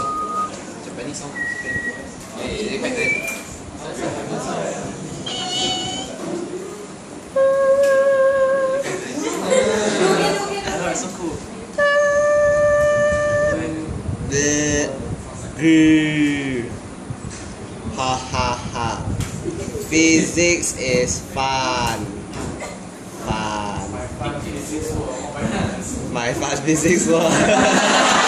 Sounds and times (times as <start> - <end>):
Hubbub, speech noise, speech babble: 0.0 - 7.4, 8.7 - 12.2, 14.9 - 18.0, 19.1 - 28.2
Speech: 19.9 - 22.2.